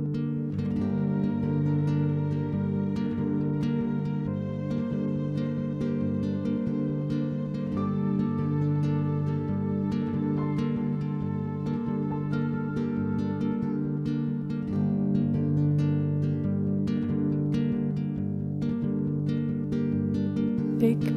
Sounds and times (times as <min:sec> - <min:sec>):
Music: 0:00.0 - 0:21.1.